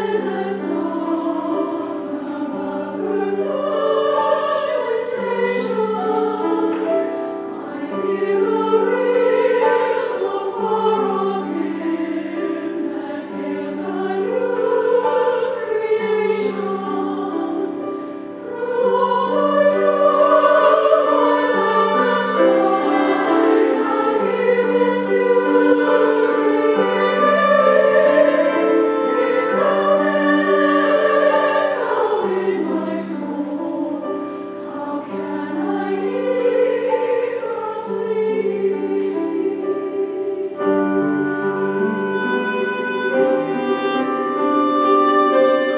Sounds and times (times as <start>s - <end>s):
Choir: 0.0s - 45.7s.